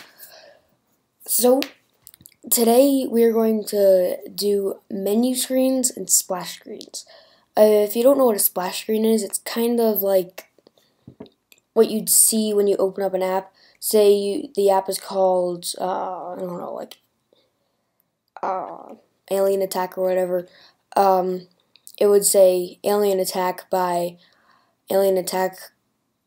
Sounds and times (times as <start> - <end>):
Speech: 1.2 - 1.7, 2.4 - 10.5, 11.8 - 17.0, 18.4 - 24.2, 24.9 - 25.7.